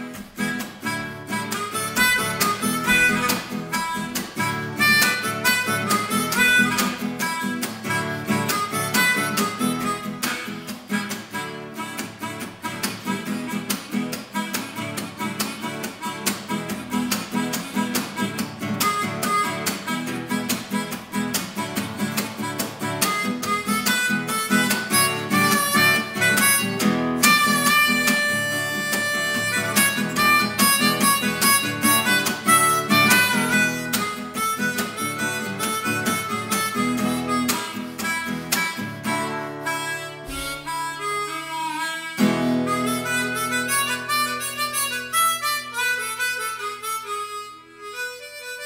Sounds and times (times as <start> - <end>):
Acoustic guitar: 0.0 - 48.6
Harmonica: 0.0 - 48.6.